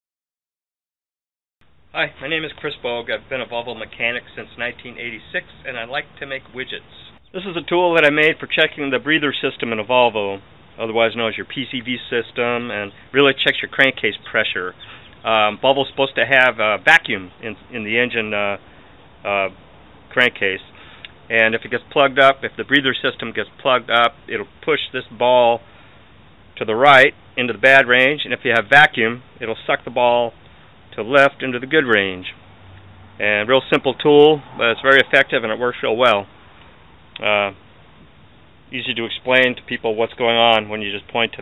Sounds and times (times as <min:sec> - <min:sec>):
Speech: 0:01.9 - 0:18.6, 0:19.2 - 0:25.6, 0:26.6 - 0:32.4, 0:33.2 - 0:36.3, 0:37.2 - 0:37.6, 0:38.7 - 0:41.4.